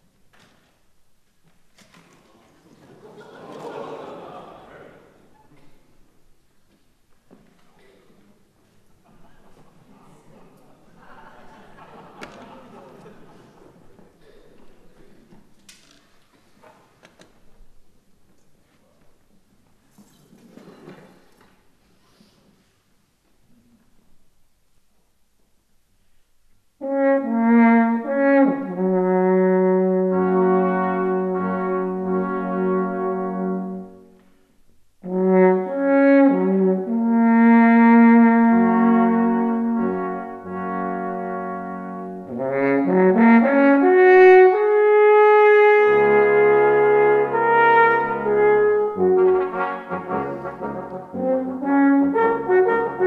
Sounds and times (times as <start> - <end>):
Trombone: 26.8 - 34.1, 35.0 - 53.0
Trumpet: 26.8 - 34.2, 35.0 - 53.0
French horn: 26.8 - 34.4, 35.0 - 53.0.